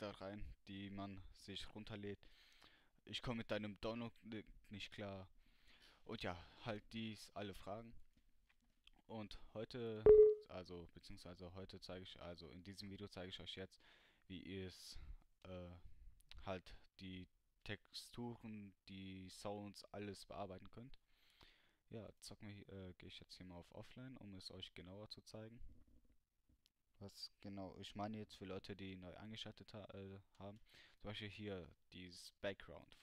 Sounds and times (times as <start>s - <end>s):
Speech: 0.0s - 2.2s, 3.0s - 5.4s, 6.0s - 8.0s, 9.0s - 21.0s, 21.9s - 25.6s, 27.0s - 33.0s.